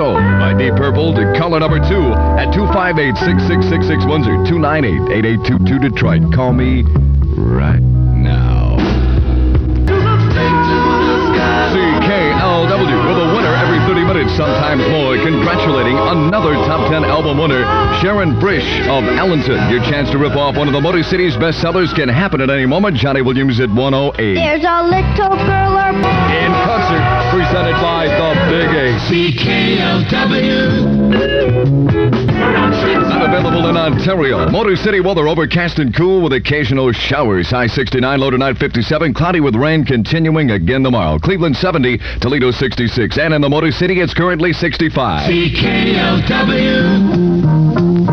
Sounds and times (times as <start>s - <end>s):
Speech: 0.0s - 8.9s, 11.5s - 29.0s, 33.1s - 45.5s
Music: 0.0s - 35.6s, 45.1s - 48.1s.